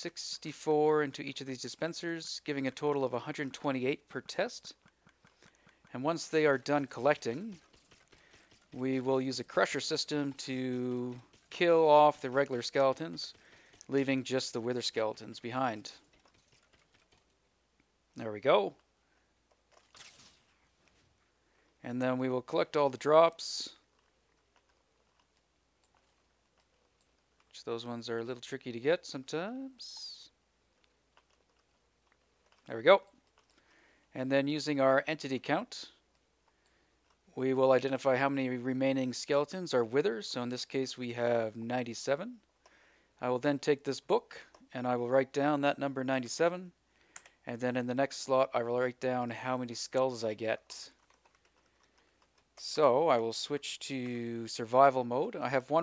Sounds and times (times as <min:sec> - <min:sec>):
Computer keyboard: 0:06.6 - 0:14.2, 0:16.0 - 0:17.4, 0:50.9 - 0:52.6.